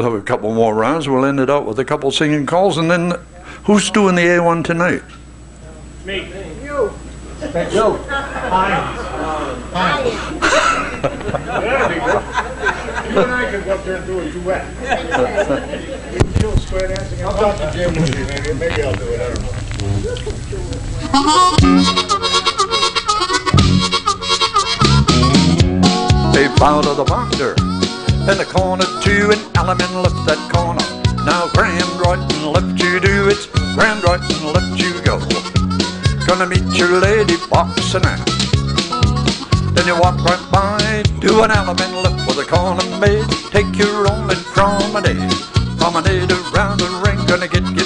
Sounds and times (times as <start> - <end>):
Music: 21.0 - 47.8.